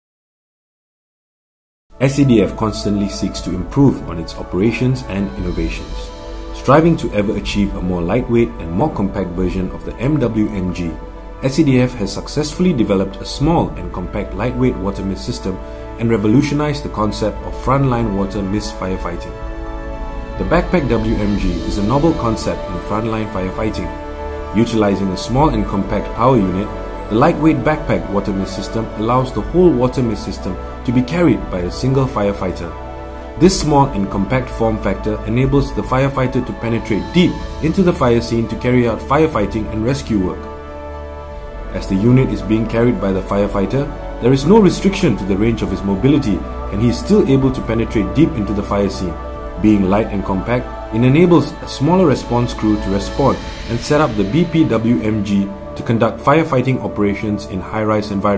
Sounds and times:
Music: 1.9 - 58.3
Speech: 2.0 - 19.4, 20.4 - 32.8, 33.4 - 40.5, 41.7 - 58.3.

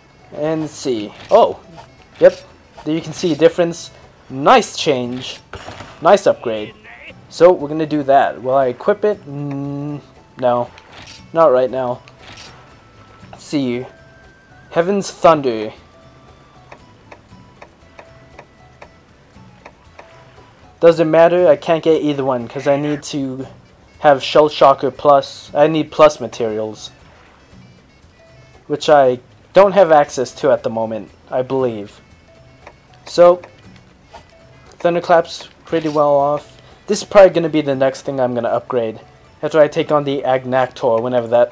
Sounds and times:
Music: 0.0 - 41.5
Speech: 0.3 - 1.6, 2.2 - 5.4, 6.0 - 10.7, 11.4 - 12.0, 20.8 - 27.0, 28.7 - 32.0, 33.1 - 33.4, 34.8 - 41.5.

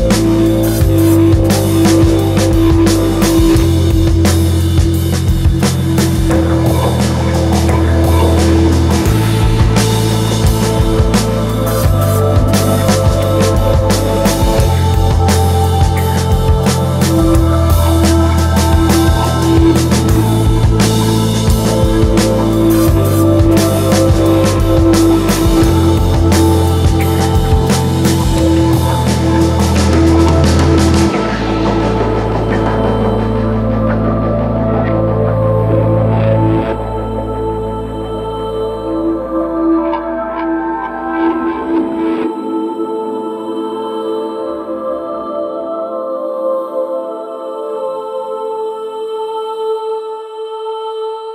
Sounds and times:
Ambient music: 0.0 - 51.3.

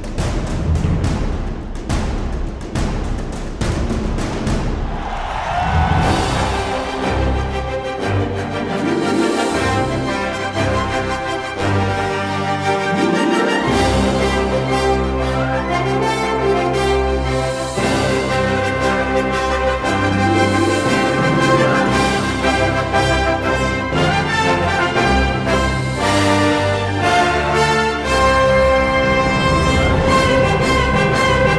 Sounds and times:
Music: 0.0 - 31.5.

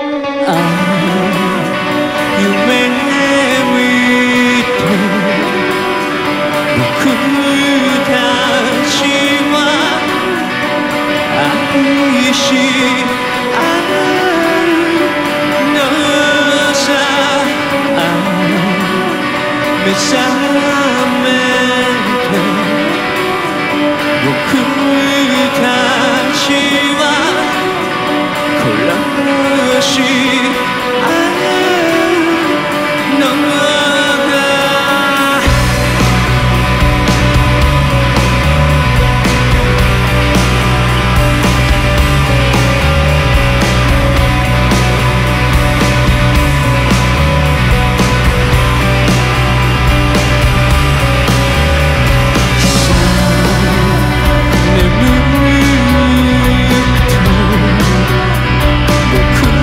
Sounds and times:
Music: 0.0 - 59.6.

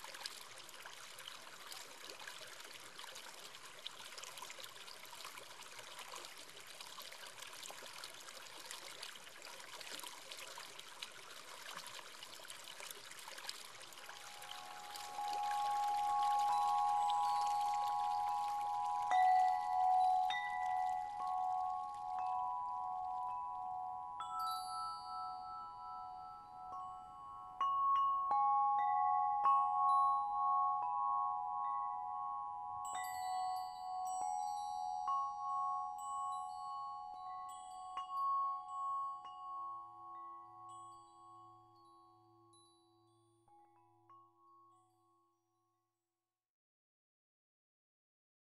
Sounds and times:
Glockenspiel: 13.6 - 46.1.

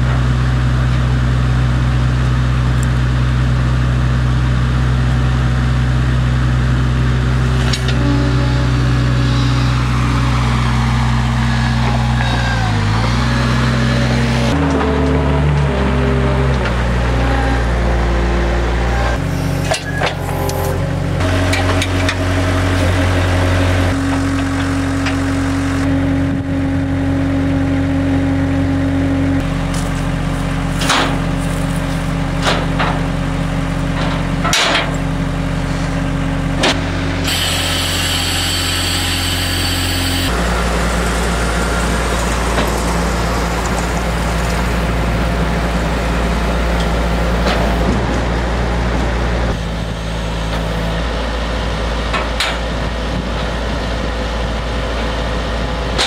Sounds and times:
Engine: 0.0 - 56.0
Vehicle: 0.0 - 56.0.

